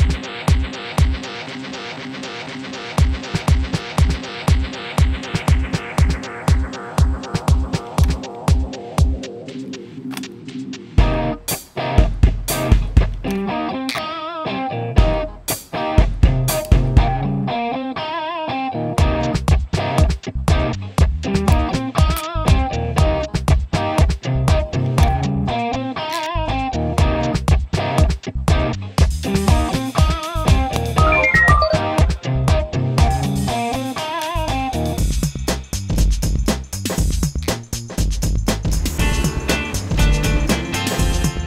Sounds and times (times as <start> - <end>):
Music: 0.0 - 41.4.